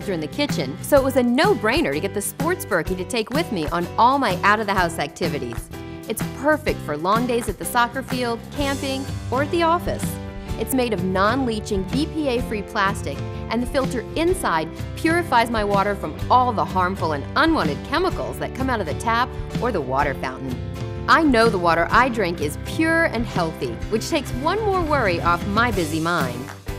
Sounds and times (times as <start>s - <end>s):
Speech: 0.0s - 26.5s
Music: 0.0s - 26.7s.